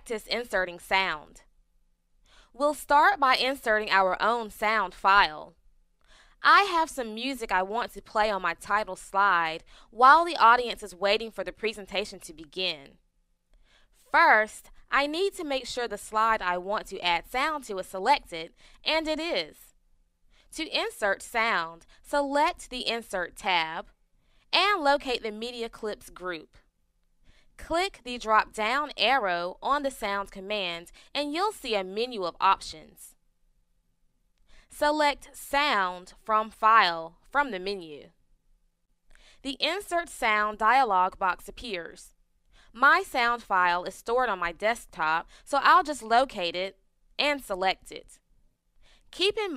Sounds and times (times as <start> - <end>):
Speech: 0.0 - 1.4, 2.6 - 5.5, 6.4 - 13.0, 14.1 - 19.6, 20.6 - 23.9, 24.6 - 26.6, 27.6 - 33.1, 34.8 - 38.1, 39.5 - 42.1, 42.8 - 48.2, 49.2 - 49.5.